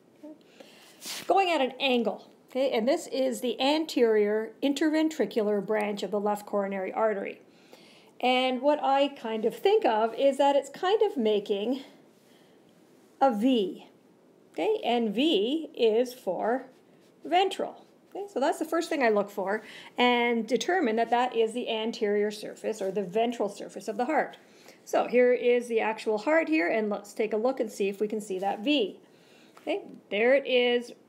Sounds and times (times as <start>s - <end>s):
Speech: 1.3s - 7.4s, 8.2s - 12.0s, 13.2s - 14.0s, 14.6s - 29.0s, 29.6s - 31.0s.